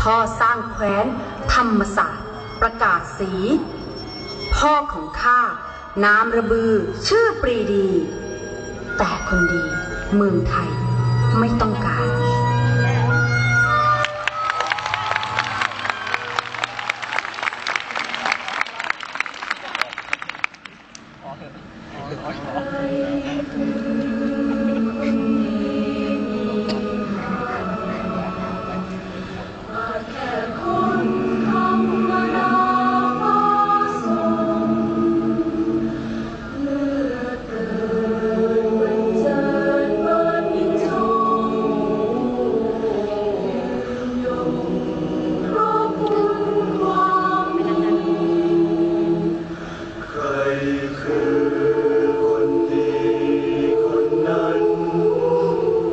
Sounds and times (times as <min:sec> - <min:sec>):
Music: 0:00.0 - 0:18.4, 0:22.6 - 0:55.9.